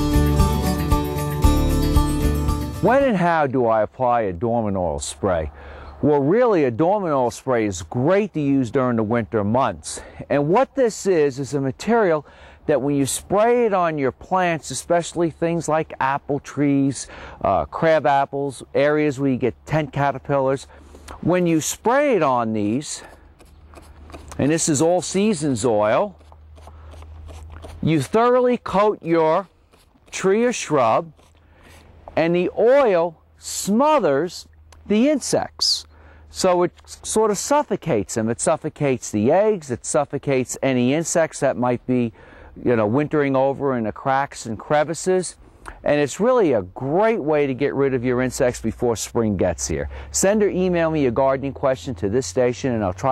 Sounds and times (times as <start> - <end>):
Speech: 2.8 - 23.1, 24.4 - 26.2, 27.8 - 29.5, 30.1 - 31.1, 32.2 - 53.1.